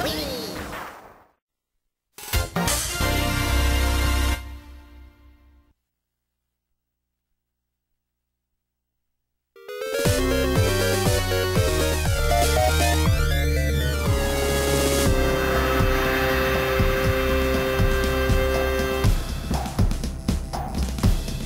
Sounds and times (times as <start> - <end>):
Theme music: 2.3 - 5.6, 9.6 - 21.1.